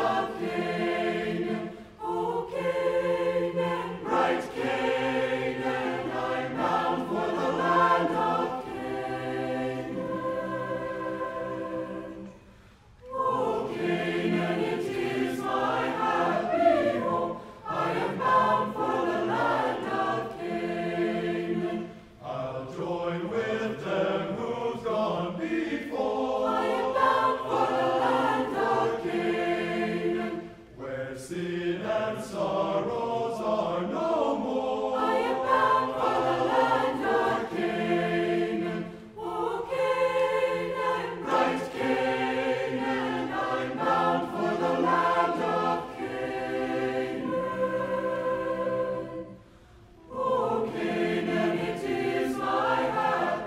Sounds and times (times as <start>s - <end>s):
Gospel music: 0.0s - 53.4s.